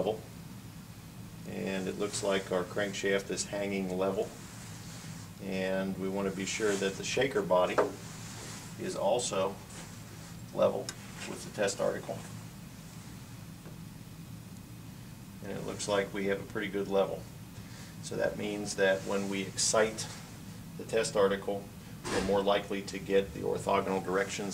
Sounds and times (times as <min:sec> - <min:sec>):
Speech: 0:00.0 - 0:00.2, 0:01.5 - 0:04.4, 0:05.4 - 0:07.9, 0:08.8 - 0:09.6, 0:10.5 - 0:12.3, 0:15.4 - 0:17.3, 0:18.0 - 0:20.2, 0:20.8 - 0:24.5.